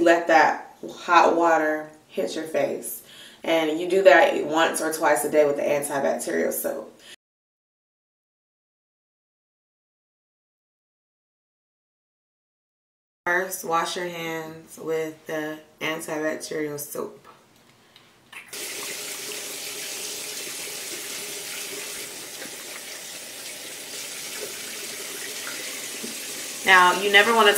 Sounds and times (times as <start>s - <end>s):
Water: 18.4s - 27.5s
Sink (filling or washing): 18.5s - 27.5s
Water tap, faucet: 18.5s - 27.5s.